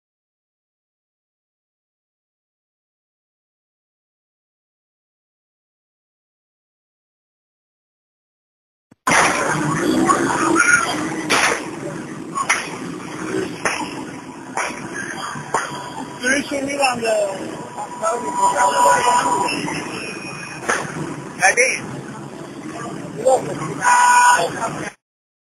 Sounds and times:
Speech: 0:09.5 - 0:13.5, 0:16.2 - 0:20.1, 0:21.4 - 0:21.8, 0:22.6 - 0:25.0.

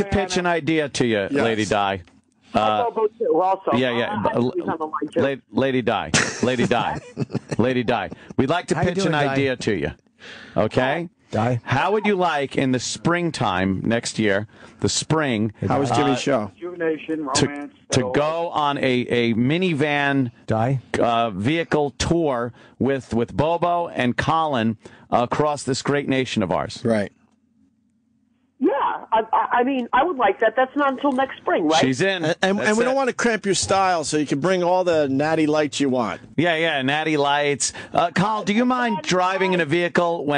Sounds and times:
Speech: 0:00.0 - 0:02.0, 0:02.6 - 0:10.0, 0:10.6 - 0:27.1, 0:28.7 - 0:40.3.

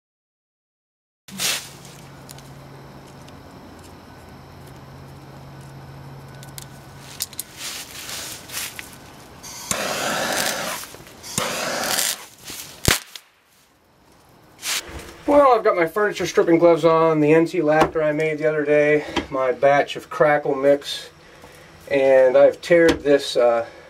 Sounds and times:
Crackle: 0:01.3 - 0:15.4
Speech: 0:15.3 - 0:21.2, 0:21.9 - 0:23.7.

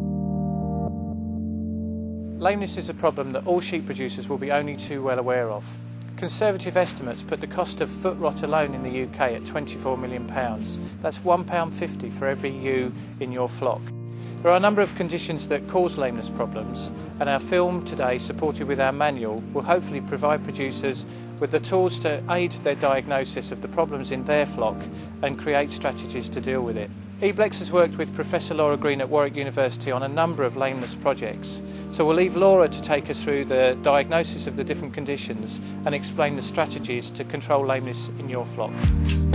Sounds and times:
Music: 0:00.0 - 0:39.3
Speech: 0:02.4 - 0:38.8.

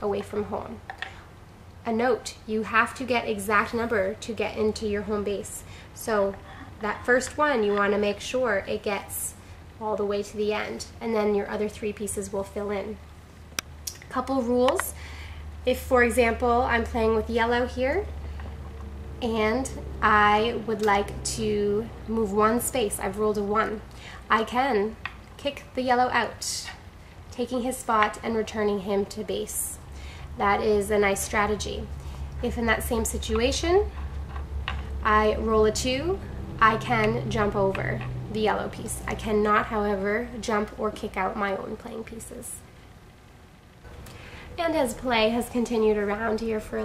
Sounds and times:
Speech: 0:00.0 - 0:00.8, 0:01.9 - 0:13.0, 0:14.0 - 0:15.0, 0:15.7 - 0:18.1, 0:19.2 - 0:26.8, 0:27.4 - 0:29.8, 0:30.4 - 0:33.9, 0:35.0 - 0:42.6, 0:44.6 - 0:46.8
Inside, small room: 0:00.0 - 0:46.8.

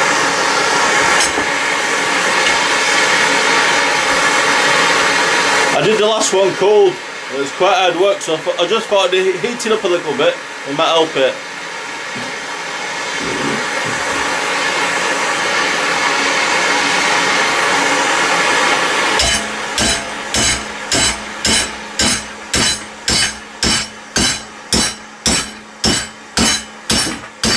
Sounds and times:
Power tool: 0:13.2 - 0:27.5.

